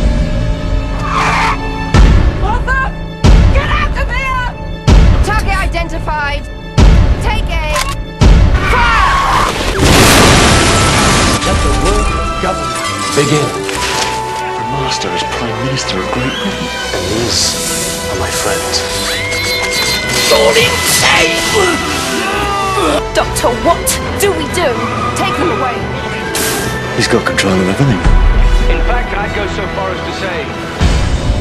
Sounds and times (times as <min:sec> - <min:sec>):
Music: 0:00.0 - 0:31.4.